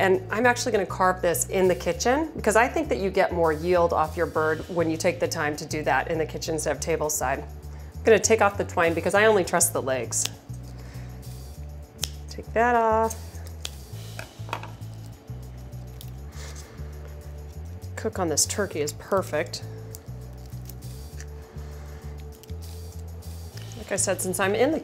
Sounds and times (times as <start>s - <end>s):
Music: 0.0s - 24.8s
Speech: 8.1s - 10.3s, 12.4s - 13.2s, 23.8s - 24.8s.